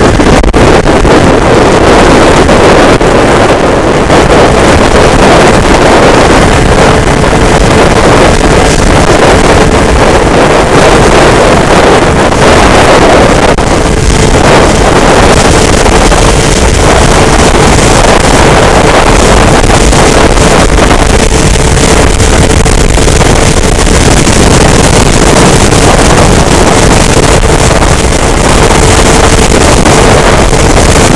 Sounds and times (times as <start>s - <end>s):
Vehicle: 0.0s - 31.1s.